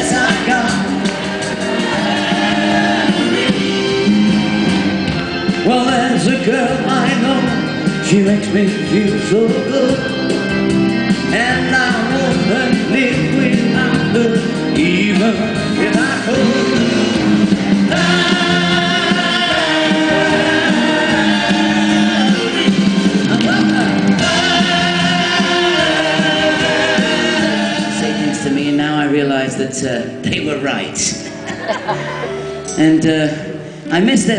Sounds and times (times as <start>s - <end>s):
Singing: 0.0s - 3.7s, 17.9s - 28.6s
Vocal music: 0.0s - 34.3s.